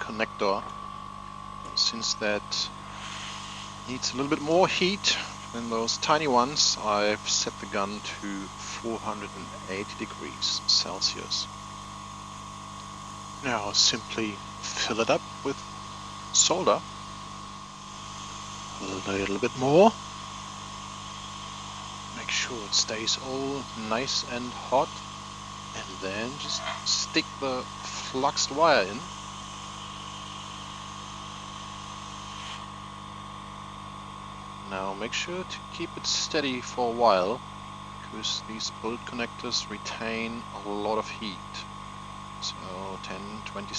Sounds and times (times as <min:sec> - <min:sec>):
Speech: 0:00.0 - 0:00.7, 0:01.7 - 0:02.8, 0:03.9 - 0:11.5, 0:13.4 - 0:15.6, 0:16.4 - 0:16.8, 0:18.8 - 0:20.0, 0:22.2 - 0:25.0, 0:25.8 - 0:29.1, 0:34.7 - 0:37.4, 0:38.0 - 0:41.7, 0:42.4 - 0:43.7
Drill: 0:01.8 - 0:11.5, 0:13.4 - 0:33.6.